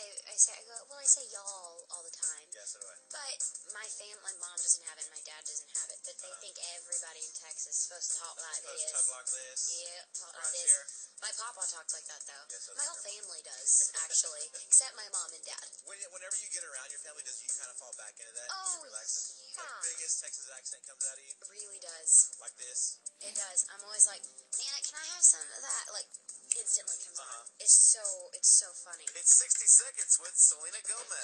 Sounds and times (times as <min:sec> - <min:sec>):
Music: 0:00.0 - 0:31.2
Speech: 0:00.0 - 0:31.2.